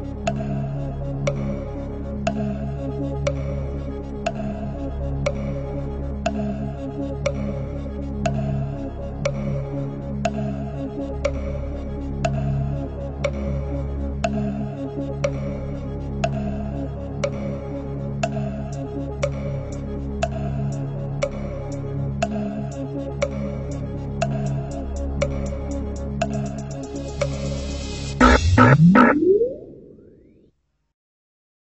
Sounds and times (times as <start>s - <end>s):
Music: 0.0s - 29.5s.